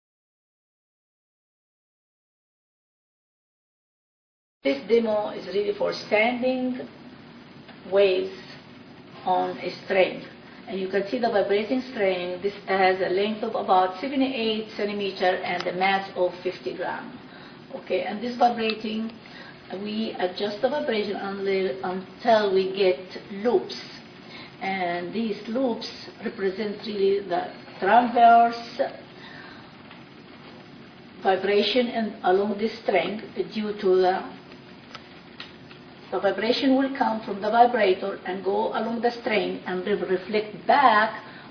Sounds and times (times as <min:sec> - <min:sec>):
Female speech, woman speaking: 0:04.7 - 0:07.0, 0:07.8 - 0:08.6, 0:09.2 - 0:29.1, 0:31.2 - 0:34.4, 0:36.1 - 0:41.3.